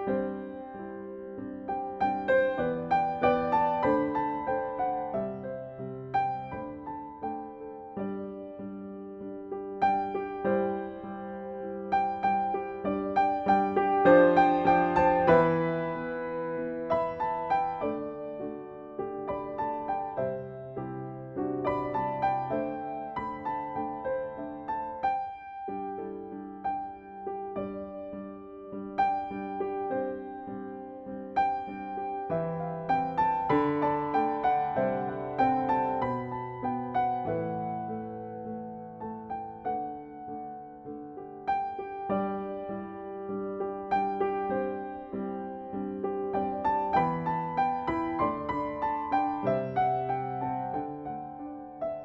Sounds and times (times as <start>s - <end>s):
Music: 0.0s - 52.0s.